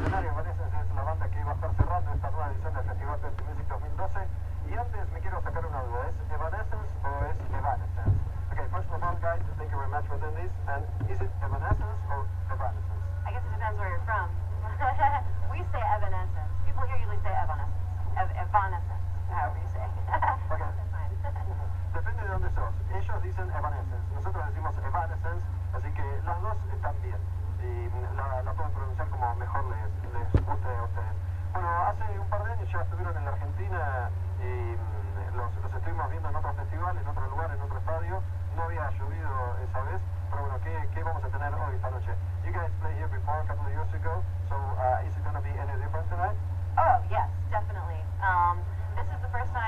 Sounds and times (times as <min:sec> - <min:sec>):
Speech: 0:00.0 - 0:49.6.